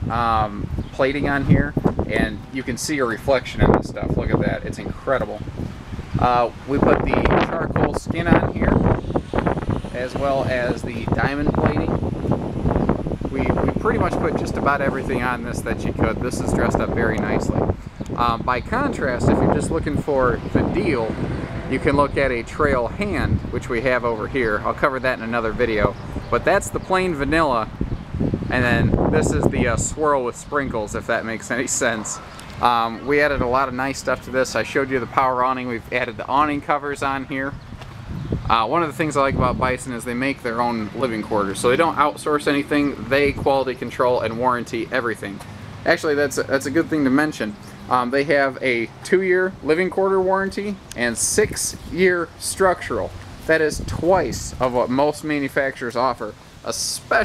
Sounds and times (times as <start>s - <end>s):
Speech: 0.1s - 5.5s, 6.2s - 8.9s, 9.9s - 12.0s, 13.3s - 27.7s, 28.5s - 37.6s, 38.5s - 57.2s.